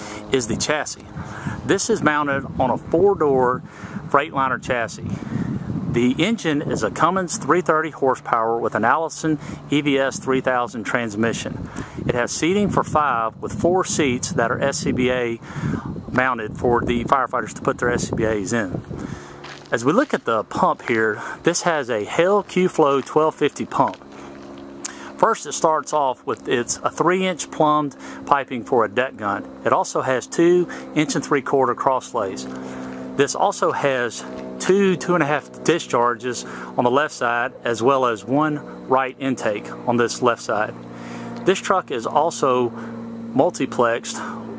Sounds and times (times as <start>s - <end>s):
Speech: 0.0s - 5.2s, 5.9s - 15.4s, 16.1s - 18.8s, 19.7s - 24.0s, 24.9s - 32.6s, 33.2s - 40.8s, 41.4s - 44.5s.